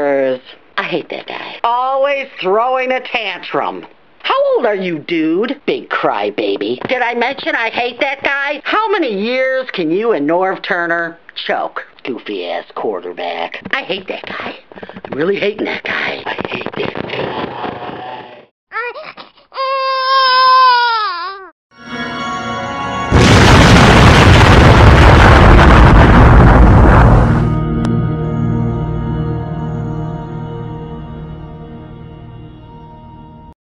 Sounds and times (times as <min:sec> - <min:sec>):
Music: 0:21.7 - 0:23.2, 0:27.3 - 0:33.6.